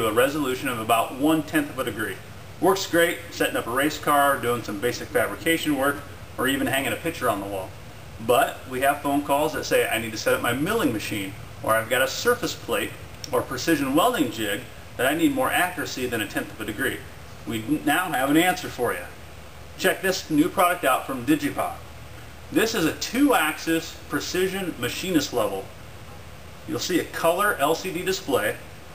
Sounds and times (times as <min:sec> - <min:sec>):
Speech: 0:00.0 - 0:19.2, 0:19.8 - 0:21.9, 0:22.5 - 0:25.7, 0:26.7 - 0:28.7.